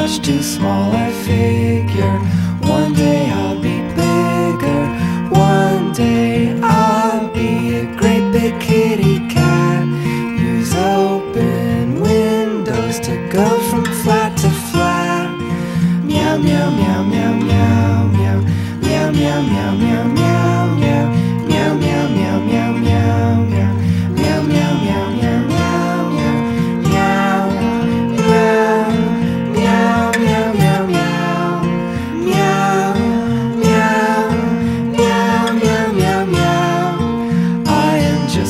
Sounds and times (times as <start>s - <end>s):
Music: 0.0s - 38.4s.